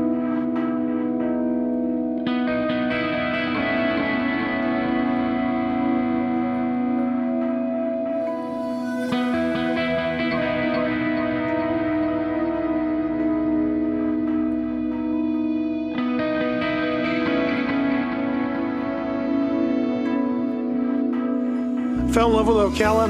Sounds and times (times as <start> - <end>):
Distortion: 0.0 - 23.0
Music: 0.0 - 23.0.